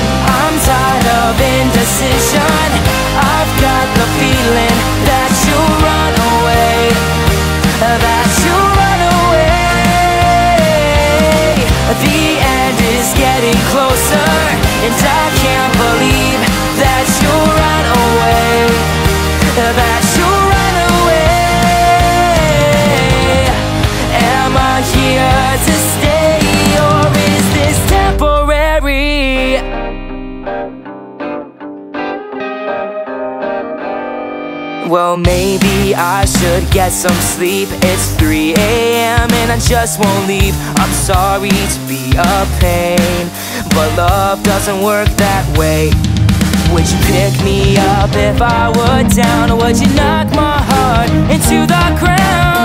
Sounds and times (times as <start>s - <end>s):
Singing: 0.0s - 29.8s, 34.9s - 46.0s, 46.6s - 52.6s
Music: 0.0s - 52.6s.